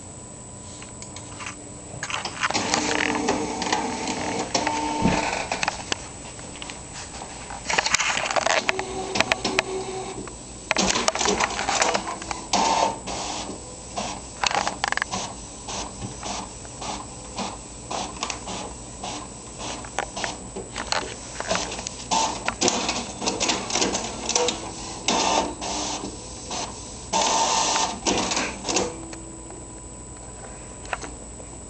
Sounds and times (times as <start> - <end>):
Printer: 0.6 - 31.2.